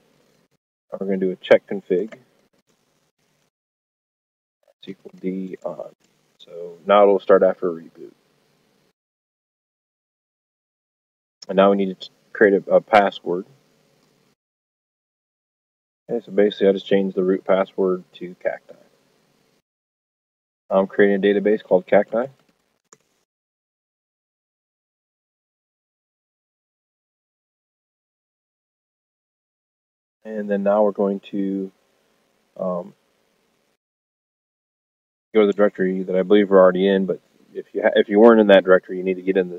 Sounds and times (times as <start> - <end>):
Speech: 0.9 - 2.2, 4.8 - 8.1, 11.4 - 13.5, 16.1 - 18.8, 20.7 - 22.3, 30.3 - 31.7, 32.6 - 32.9, 35.4 - 39.5.